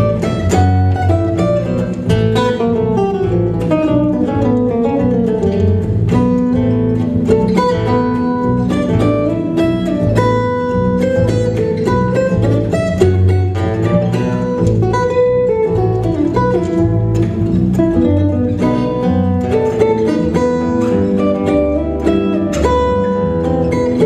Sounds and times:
Flamenco: 0.0 - 24.0
Guitar: 0.0 - 24.0.

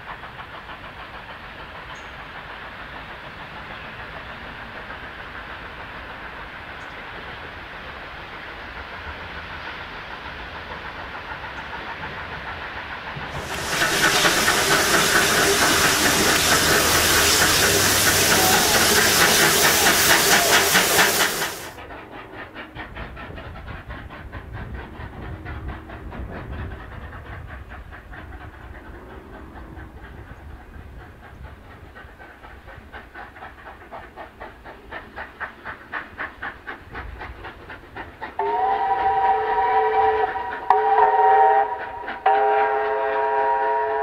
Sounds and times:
Steam: 0.0 - 44.0
Train: 0.0 - 44.0.

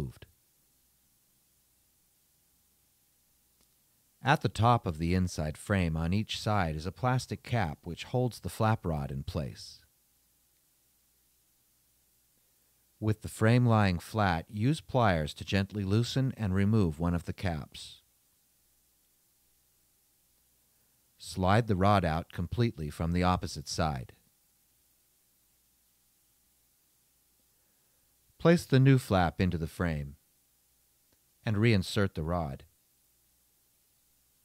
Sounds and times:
Speech: 0.0 - 0.3, 4.2 - 9.9, 13.0 - 18.1, 21.2 - 24.2, 28.4 - 30.2, 31.4 - 32.7.

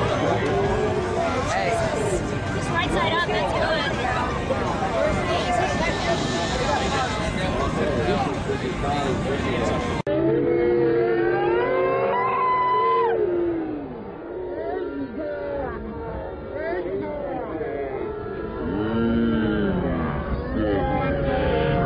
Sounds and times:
Speech: 0.0 - 10.1, 14.5 - 21.8.

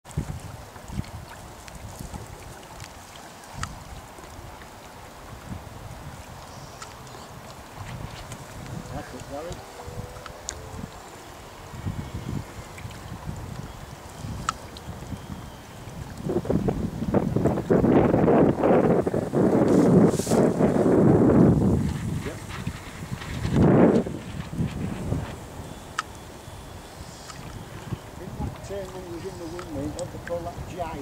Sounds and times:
Sailboat, sailing ship: 0.0 - 31.0
Speech: 8.9 - 9.6, 28.2 - 31.0.

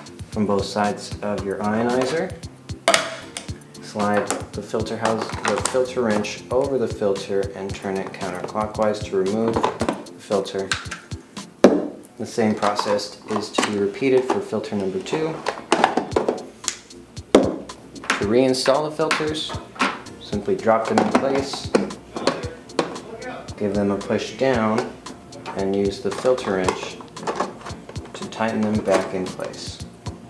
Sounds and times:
Music: 0.0 - 30.2
Speech: 0.4 - 2.4, 3.8 - 9.6, 10.2 - 10.8, 12.2 - 15.5, 18.2 - 19.6, 20.2 - 27.0, 28.2 - 29.9.

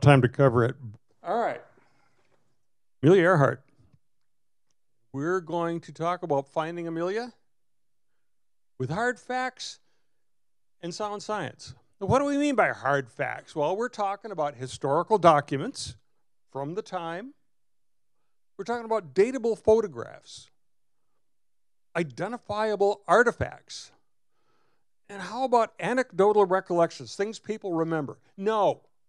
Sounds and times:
Speech: 0.0 - 1.7, 3.0 - 3.6, 5.2 - 7.4, 8.8 - 9.8, 10.8 - 16.0, 16.6 - 17.4, 18.6 - 20.5, 22.0 - 24.0, 25.1 - 28.9.

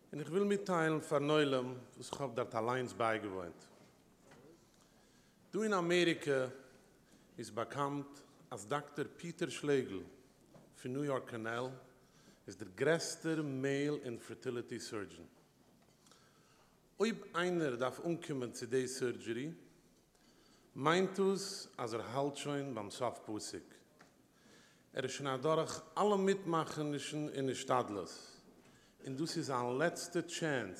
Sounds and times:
Narration, monologue: 0.0 - 30.7
Male speech, man speaking: 0.1 - 3.7, 5.5 - 6.6, 7.4 - 10.2, 10.8 - 11.9, 12.5 - 15.3, 17.0 - 19.6, 20.8 - 23.8, 25.0 - 28.4, 29.0 - 30.7.

